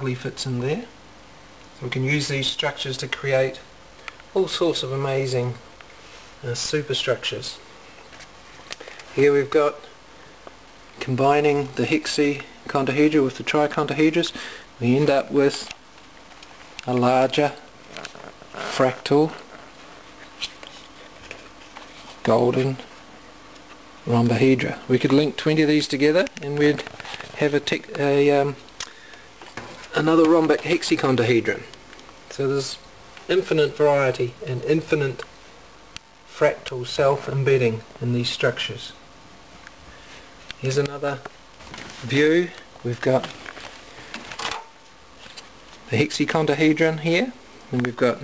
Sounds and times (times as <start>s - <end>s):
Speech: 0.0s - 1.0s, 1.8s - 3.7s, 4.3s - 5.6s, 6.4s - 7.7s, 9.2s - 10.0s, 11.0s - 15.8s, 16.8s - 17.7s, 18.6s - 19.5s, 22.2s - 22.9s, 24.0s - 28.6s, 29.9s - 35.3s, 36.3s - 39.0s, 40.6s - 41.3s, 42.0s - 43.4s, 45.9s - 48.2s
Inside, small room: 0.0s - 48.2s.